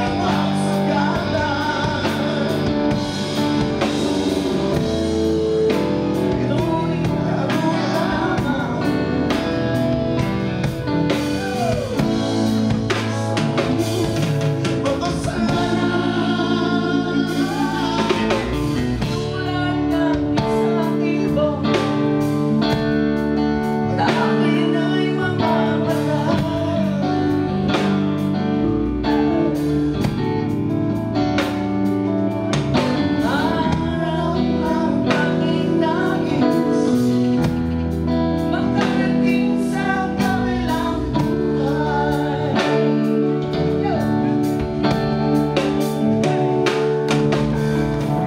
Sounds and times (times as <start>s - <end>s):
Singing: 0.0s - 4.1s, 4.7s - 10.0s, 11.1s - 22.3s, 23.9s - 27.9s, 32.8s - 37.7s, 38.5s - 44.2s
Music: 0.0s - 48.2s.